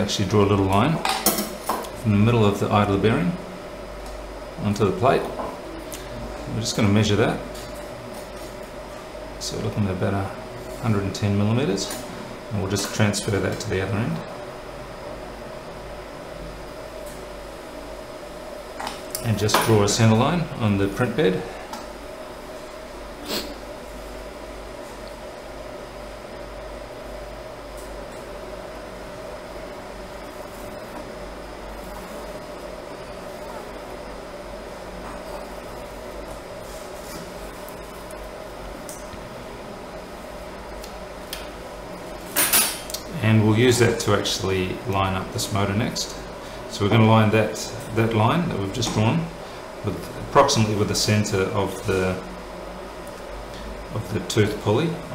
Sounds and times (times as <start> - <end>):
Speech: 0.0 - 1.1, 2.0 - 3.4, 4.6 - 5.4, 6.5 - 7.5, 9.4 - 14.3, 19.2 - 21.5, 43.1 - 52.3, 53.9 - 55.1.